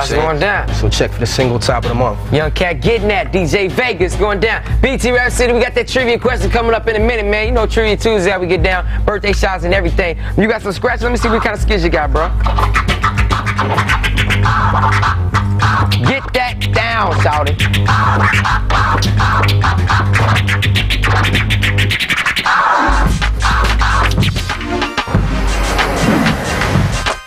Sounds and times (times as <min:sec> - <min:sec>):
Speech: 0:00.0 - 0:12.4, 0:16.0 - 0:17.6
Scratching (performance technique): 0:11.0 - 0:27.2.